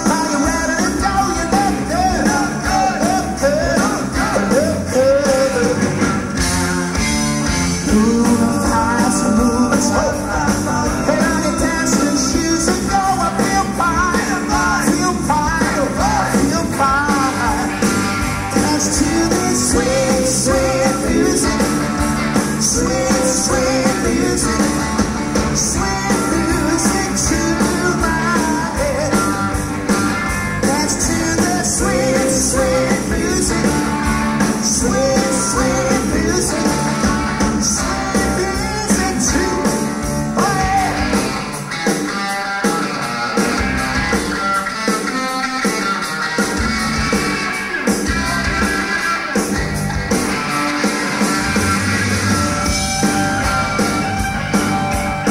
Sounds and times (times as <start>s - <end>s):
Blues: 0.0s - 55.3s
Rhythm and blues: 0.0s - 55.3s.